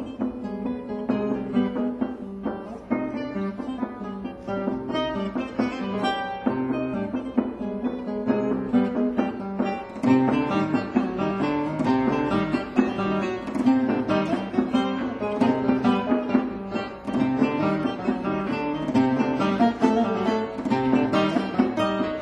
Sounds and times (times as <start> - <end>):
Guitar: 0.0 - 22.2.